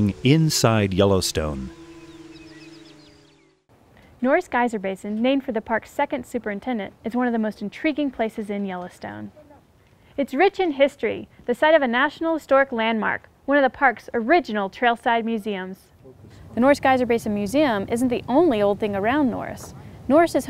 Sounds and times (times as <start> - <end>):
Speech: 0.0 - 1.7, 4.2 - 9.6, 10.2 - 20.5.